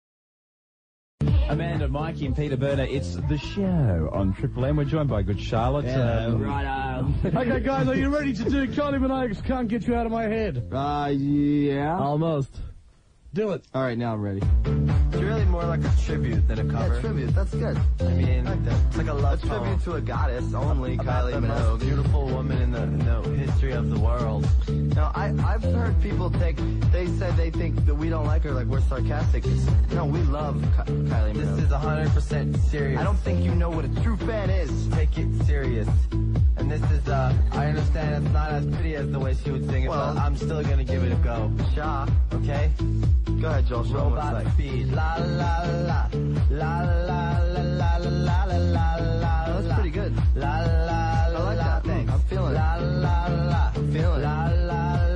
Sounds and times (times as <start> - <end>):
Music: 1.2 - 12.8, 13.7 - 55.1
Speech: 1.4 - 12.7, 13.3 - 14.5, 15.2 - 36.0, 36.6 - 42.7.